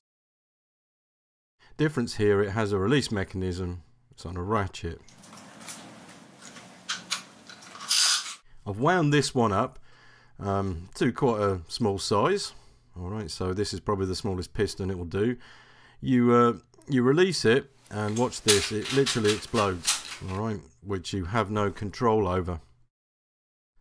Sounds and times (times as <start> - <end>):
Speech: 1.8 - 5.1, 8.6 - 9.8, 10.4 - 15.4, 16.0 - 22.7.